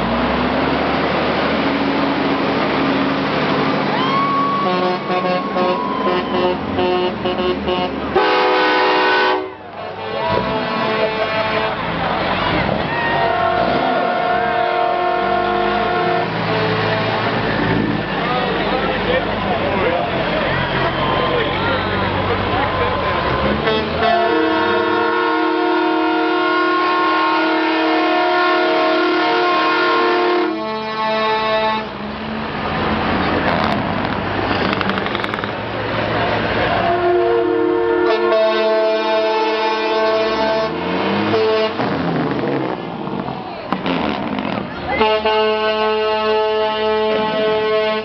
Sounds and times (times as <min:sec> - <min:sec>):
Truck: 0:00.0 - 0:48.0
Speech: 0:18.1 - 0:23.6, 0:43.2 - 0:43.8.